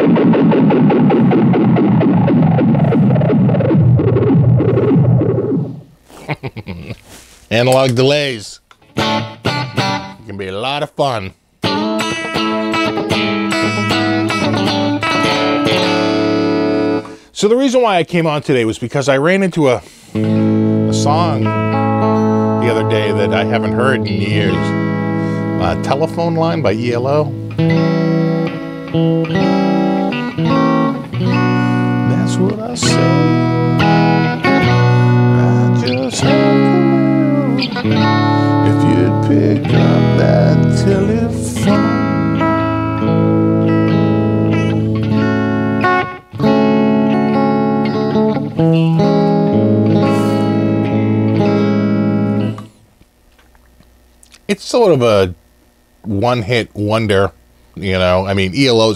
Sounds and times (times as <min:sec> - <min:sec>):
Effects unit: 0:00.0 - 0:07.1, 0:08.7 - 0:10.3, 0:11.3 - 0:17.3, 0:20.0 - 0:54.5, 0:55.4 - 0:56.4
Bass guitar: 0:00.0 - 0:08.0, 0:08.8 - 0:10.3, 0:11.6 - 0:17.3, 0:20.1 - 0:52.8
Inside, small room: 0:00.0 - 0:58.9.